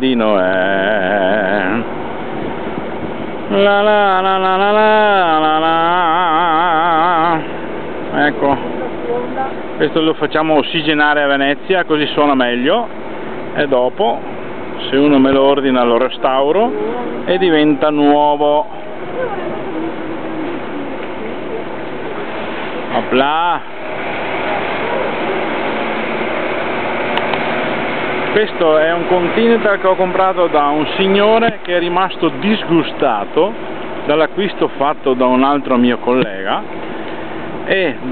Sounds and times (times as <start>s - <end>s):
Motorboat, speedboat: 0.0s - 38.1s.